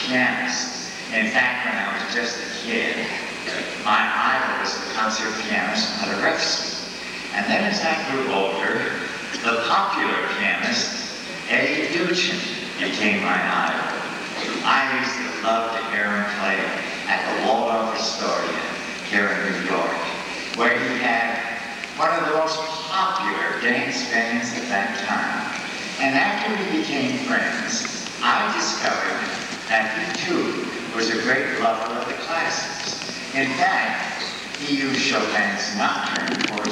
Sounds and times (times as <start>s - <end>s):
Speech: 0.0s - 36.7s.